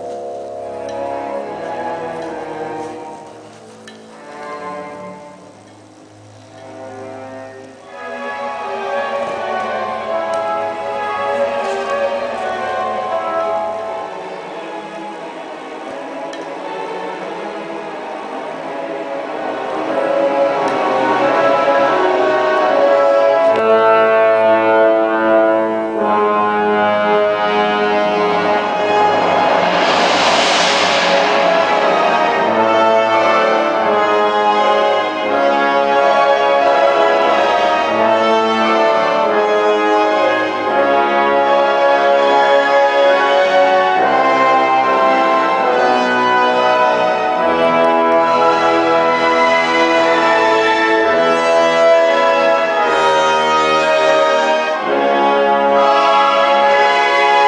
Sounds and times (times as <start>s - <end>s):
Music: 0.0s - 57.4s.